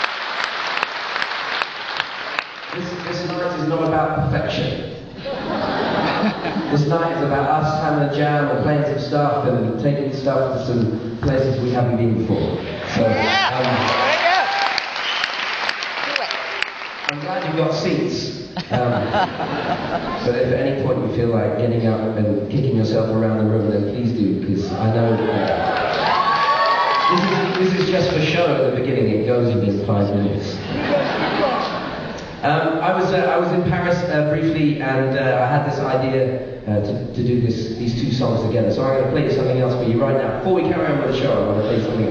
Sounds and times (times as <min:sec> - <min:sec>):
Speech: 0:02.7 - 0:05.0, 0:06.7 - 0:13.9, 0:17.1 - 0:19.1, 0:20.2 - 0:25.6, 0:27.1 - 0:31.7, 0:32.4 - 0:42.1.